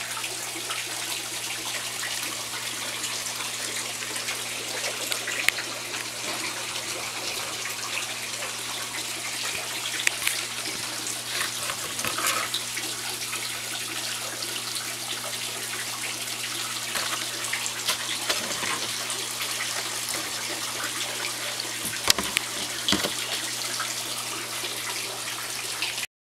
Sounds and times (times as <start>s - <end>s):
Stream: 0.0s - 26.1s.